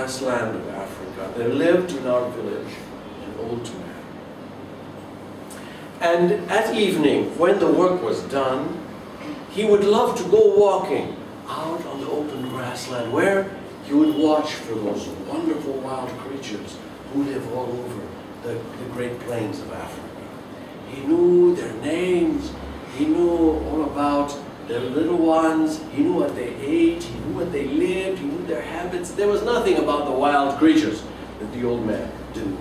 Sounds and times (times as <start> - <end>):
Speech: 0.0 - 4.1, 6.0 - 20.3, 20.9 - 32.6.